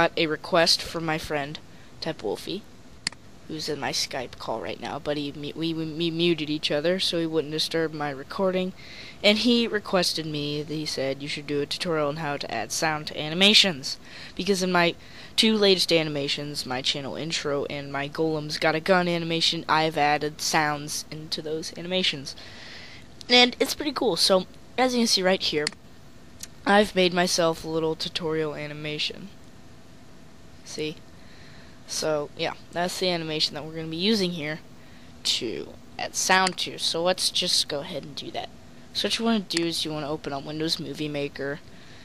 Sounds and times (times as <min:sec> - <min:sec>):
Speech: 0:00.0 - 0:02.6, 0:03.5 - 0:22.4, 0:23.2 - 0:25.8, 0:26.4 - 0:29.4, 0:30.6 - 0:31.0, 0:31.9 - 0:34.6, 0:35.2 - 0:41.6.